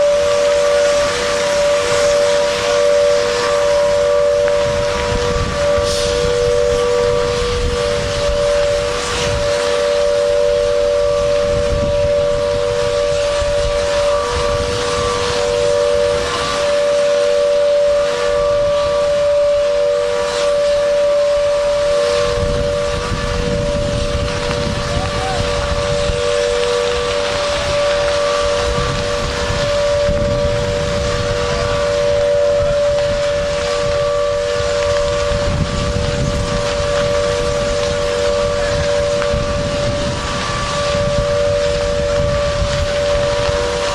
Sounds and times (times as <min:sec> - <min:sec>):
Ship: 0:00.0 - 0:43.9
Wind noise (microphone): 0:00.0 - 0:43.9.